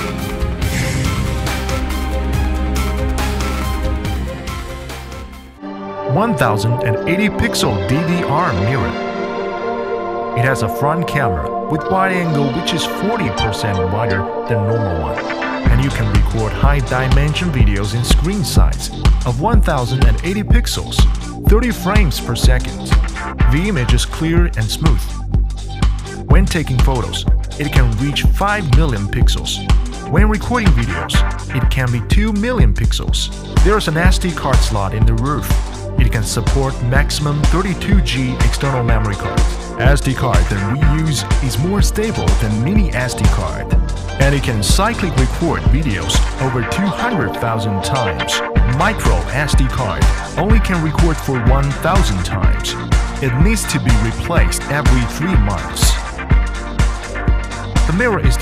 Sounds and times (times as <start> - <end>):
Music: 0.0 - 58.4
Speech: 6.1 - 9.0, 10.4 - 25.1, 26.3 - 56.0, 57.9 - 58.4.